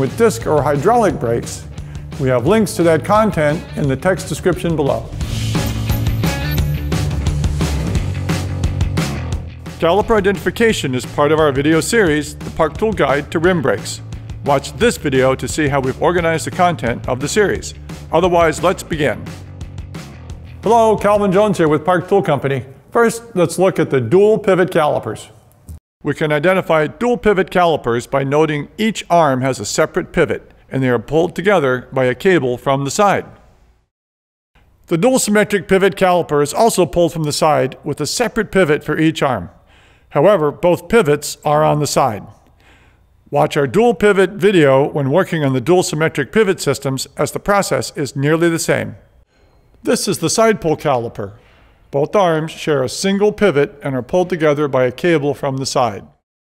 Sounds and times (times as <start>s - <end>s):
Speech: 0.0s - 5.2s, 9.8s - 19.3s, 20.6s - 25.4s, 26.0s - 33.4s, 34.9s - 42.4s, 43.3s - 49.0s, 49.8s - 56.2s.